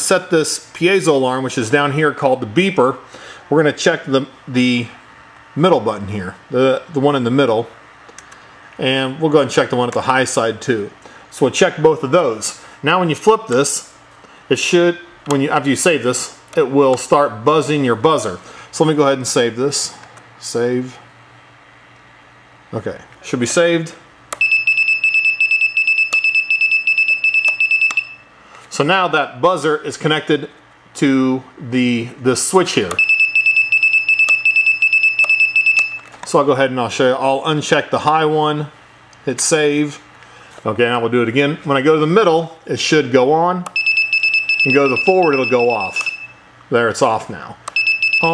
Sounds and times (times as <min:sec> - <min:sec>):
Speech: 0:00.0 - 0:05.0, 0:05.6 - 0:07.8, 0:08.8 - 0:21.1, 0:22.7 - 0:24.1, 0:28.7 - 0:33.0, 0:36.3 - 0:43.8, 0:44.6 - 0:46.1, 0:46.7 - 0:47.6
Buzzer: 0:24.4 - 0:28.3, 0:33.0 - 0:36.1, 0:43.8 - 0:46.4, 0:47.8 - 0:48.3.